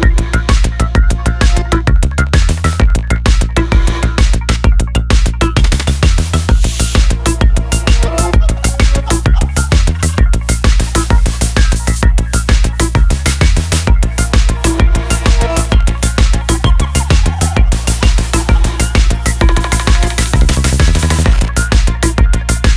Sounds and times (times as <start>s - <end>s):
Electronica: 0.0s - 22.7s.